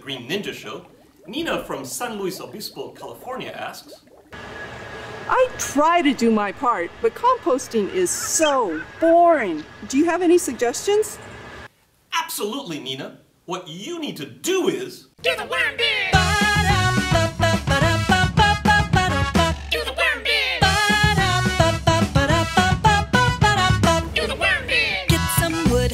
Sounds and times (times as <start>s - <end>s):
Speech: 0.0s - 3.9s, 5.3s - 11.2s, 12.1s - 15.8s
Music: 16.2s - 19.8s, 20.6s - 25.9s.